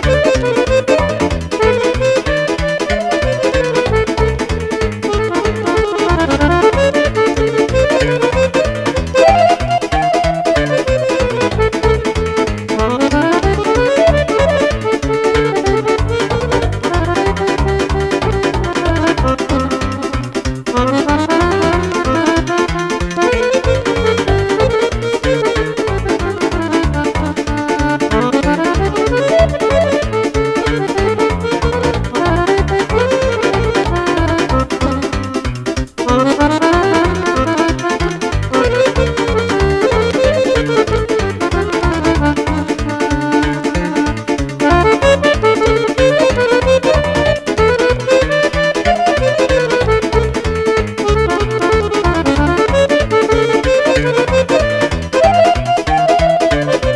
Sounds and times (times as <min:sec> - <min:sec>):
Accordion: 0:00.0 - 0:56.9
Keyboard (musical): 0:00.0 - 0:56.9.